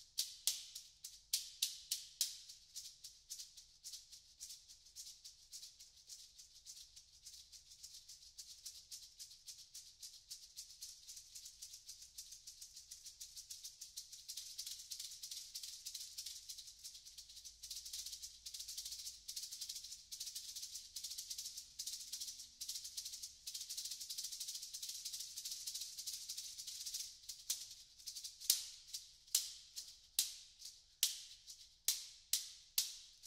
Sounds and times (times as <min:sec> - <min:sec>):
Maraca: 0:00.0 - 0:33.2.